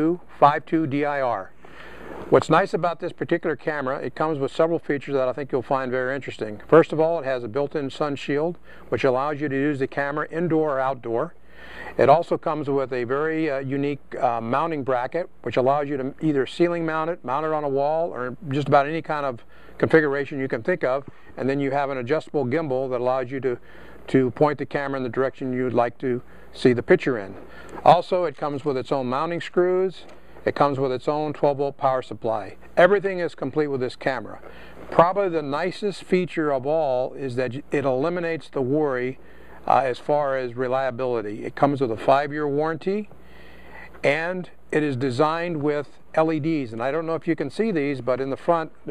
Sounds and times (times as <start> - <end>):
Speech: 0.0 - 1.5, 2.3 - 43.1, 43.8 - 48.9.